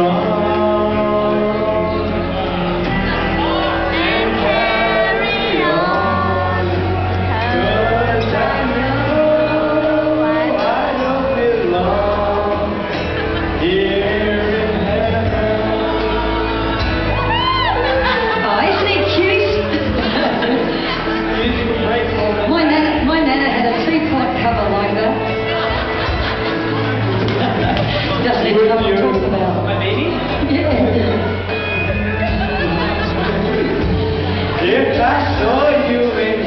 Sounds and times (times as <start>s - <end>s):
Male singing: 0.0s - 22.8s, 28.2s - 36.4s
Music: 0.0s - 36.4s
Female singing: 3.1s - 11.0s.